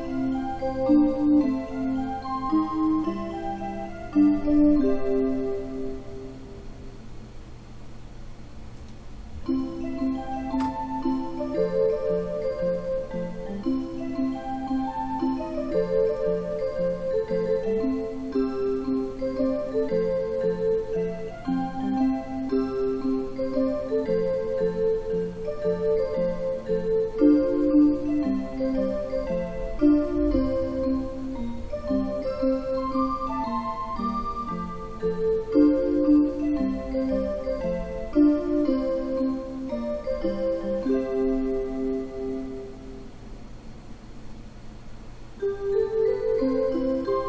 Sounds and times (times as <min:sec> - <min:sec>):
Music: 0:00.0 - 0:07.4, 0:09.3 - 0:43.8, 0:45.4 - 0:47.2.